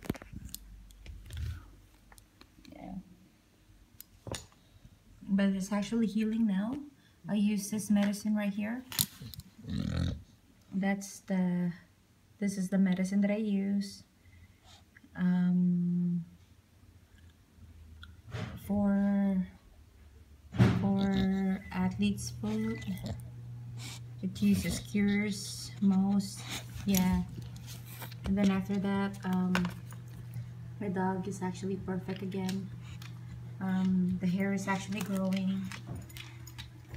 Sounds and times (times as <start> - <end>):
Speech: 2.6 - 3.1, 5.2 - 8.9, 10.7 - 14.1, 15.2 - 16.4, 18.6 - 19.6, 20.6 - 23.2, 24.2 - 27.4, 28.2 - 29.8, 30.8 - 32.7, 33.6 - 35.8.